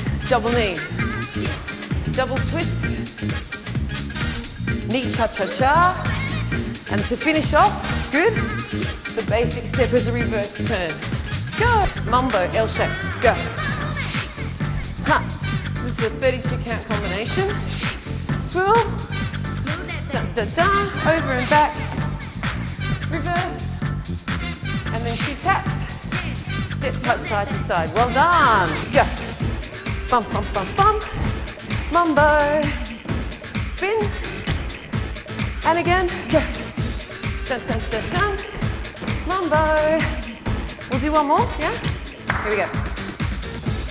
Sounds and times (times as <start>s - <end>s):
Music: 0.0s - 43.9s
Speech: 4.9s - 6.0s, 11.6s - 13.6s, 15.0s - 17.6s, 18.4s - 18.9s, 24.9s - 25.8s, 26.8s - 29.2s, 30.1s - 31.0s, 33.8s - 34.2s, 35.7s - 36.6s, 37.5s - 38.4s, 40.9s - 41.8s, 42.4s - 42.7s.